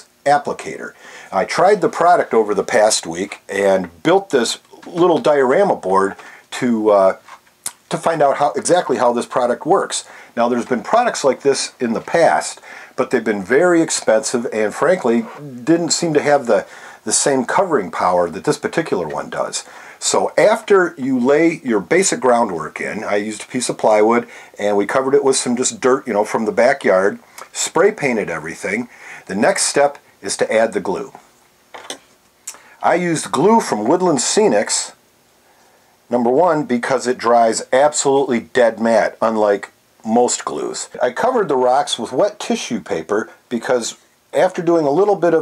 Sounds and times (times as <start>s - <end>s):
Speech: 0.0s - 31.2s, 31.8s - 35.0s, 36.1s - 45.4s.